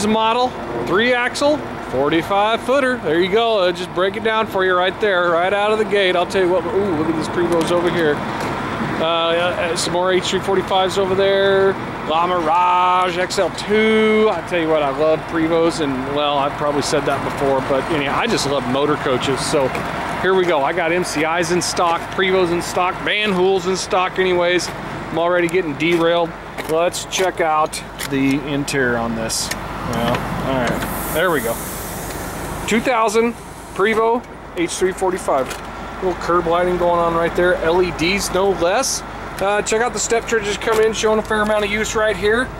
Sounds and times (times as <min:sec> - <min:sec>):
Speech: 0:00.0 - 0:08.2, 0:09.0 - 0:31.6, 0:32.7 - 0:42.5
Vehicle: 0:00.0 - 0:42.6.